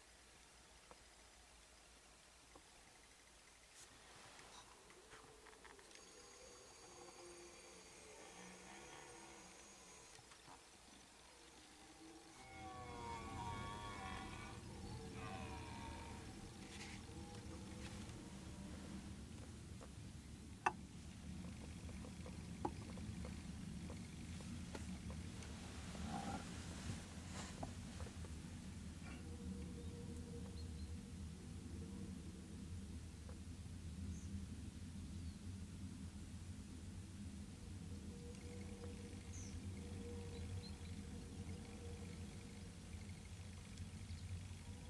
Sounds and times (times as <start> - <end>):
Wild animals: 4.5 - 10.2, 11.3 - 19.0, 25.6 - 26.7.